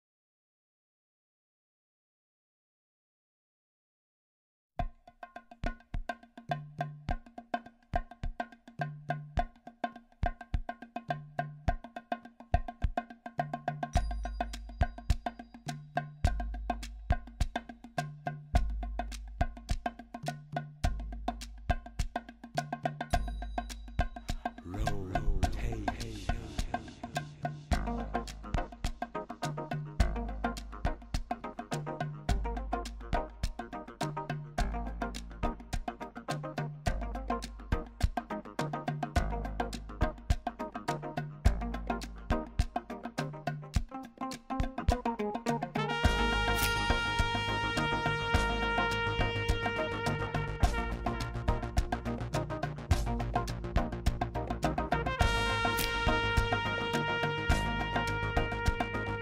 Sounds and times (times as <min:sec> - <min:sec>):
Wood block: 0:04.8 - 0:59.2.